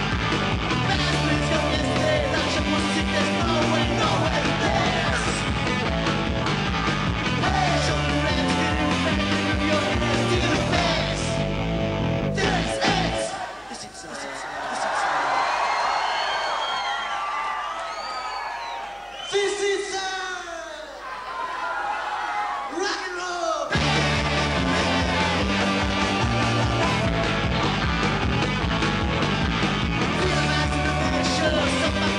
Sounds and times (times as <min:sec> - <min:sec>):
Rock and roll: 0:00.0 - 0:13.6, 0:22.9 - 0:32.1
Speech: 0:13.2 - 0:15.5, 0:19.3 - 0:21.0, 0:22.7 - 0:23.8.